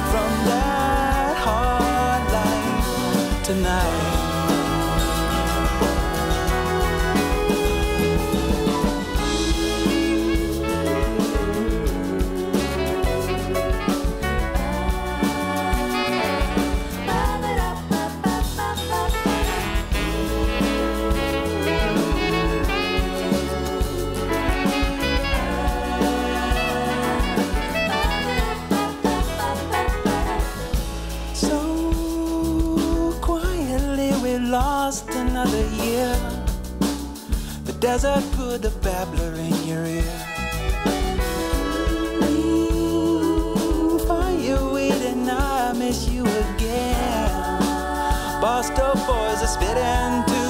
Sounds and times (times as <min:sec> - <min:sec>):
Singing: 0:00.0 - 0:30.8, 0:37.8 - 0:50.5
Jazz: 0:00.0 - 0:50.5.